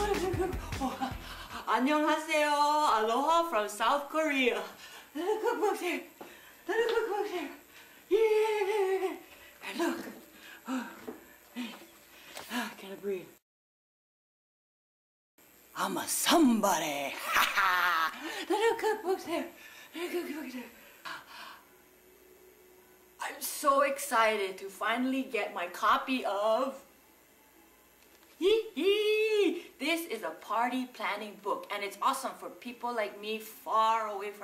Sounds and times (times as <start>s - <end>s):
Speech: 1.6s - 6.1s, 6.7s - 10.2s, 12.5s - 13.4s, 15.8s - 17.4s, 23.2s - 26.9s, 28.4s - 34.4s.